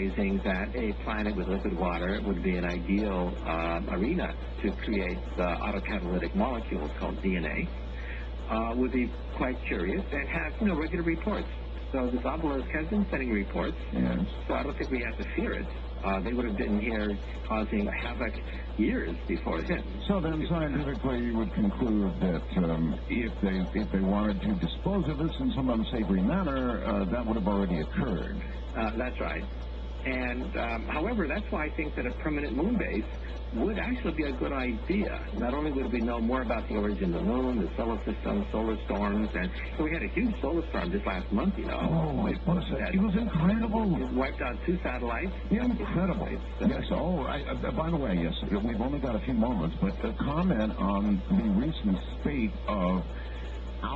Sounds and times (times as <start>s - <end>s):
Speech: 0.0s - 53.9s.